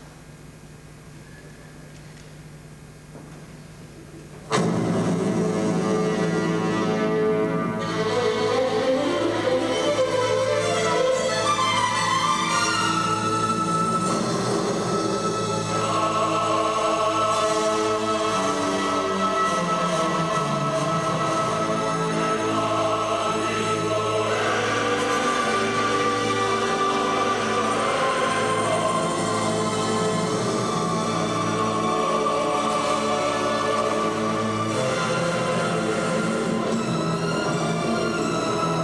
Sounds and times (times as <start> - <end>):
Orchestra: 4.5 - 38.8.